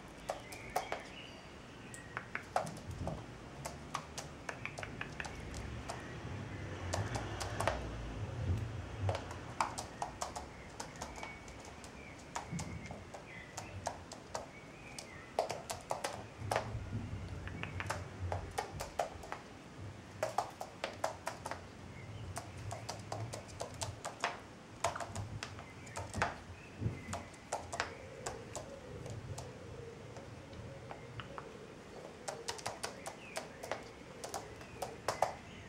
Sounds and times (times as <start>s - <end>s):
Bird: 0.0s - 35.6s.